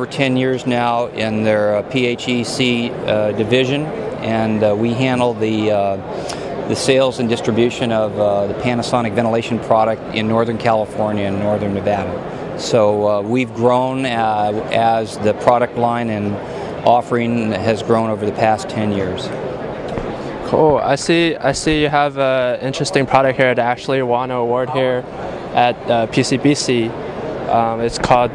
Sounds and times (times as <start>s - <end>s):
Speech: 0.0s - 6.1s, 6.7s - 19.4s, 20.4s - 28.3s.